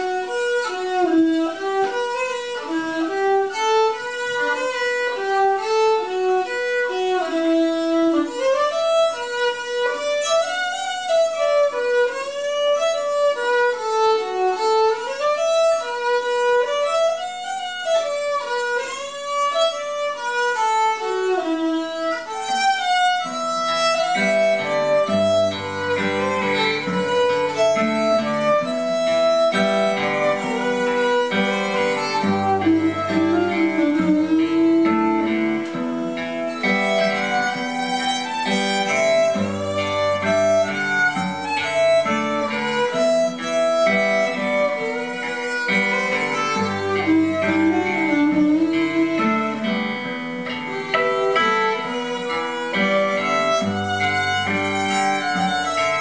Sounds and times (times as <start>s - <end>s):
Acoustic guitar: 0.0s - 56.0s
Violin, fiddle: 0.0s - 56.0s.